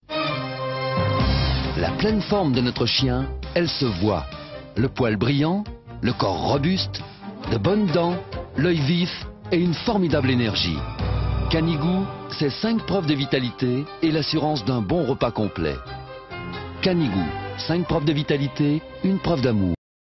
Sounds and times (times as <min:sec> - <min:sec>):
Music: 0:00.0 - 0:19.8
Speech: 0:01.8 - 0:10.8, 0:11.5 - 0:15.8, 0:16.8 - 0:19.8.